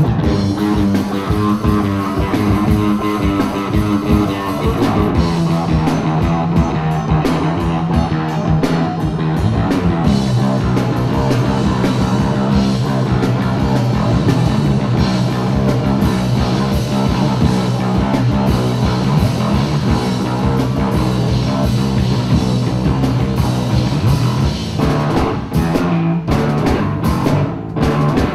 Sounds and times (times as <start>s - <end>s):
Bass guitar: 0.0s - 28.3s
Drum kit: 0.0s - 28.3s
Rock music: 0.0s - 28.3s.